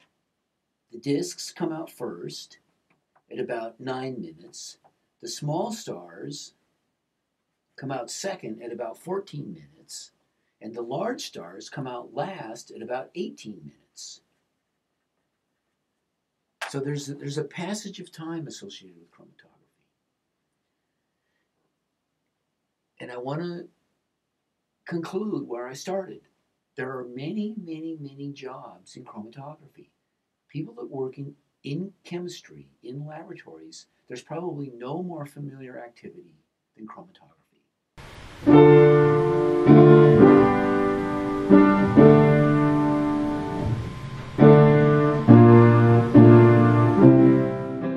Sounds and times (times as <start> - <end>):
Speech: 0.9 - 2.6, 3.3 - 6.6, 7.8 - 14.2, 16.6 - 19.6, 23.0 - 23.7, 24.9 - 37.5.